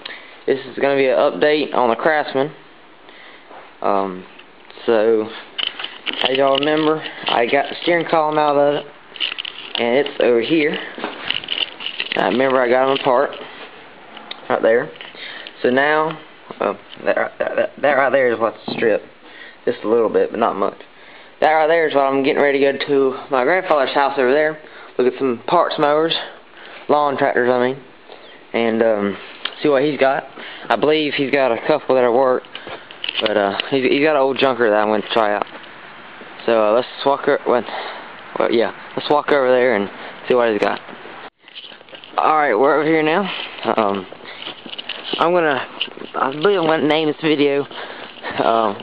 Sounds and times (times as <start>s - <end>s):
Speech: 0.5s - 2.6s, 3.8s - 5.4s, 6.2s - 8.9s, 9.8s - 10.9s, 12.2s - 13.4s, 14.3s - 15.0s, 15.6s - 20.8s, 21.4s - 27.9s, 28.5s - 32.5s, 33.2s - 35.5s, 36.4s - 37.8s, 38.4s - 40.8s, 42.2s - 44.1s, 45.2s - 47.7s, 48.3s - 48.8s.